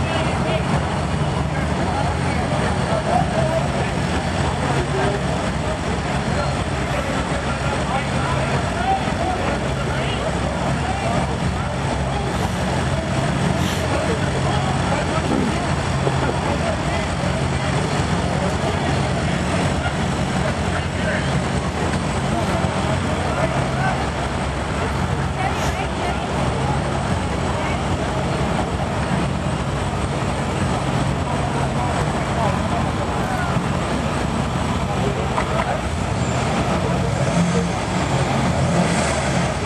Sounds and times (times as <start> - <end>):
Car: 0.0 - 39.6
Speech: 0.0 - 39.6.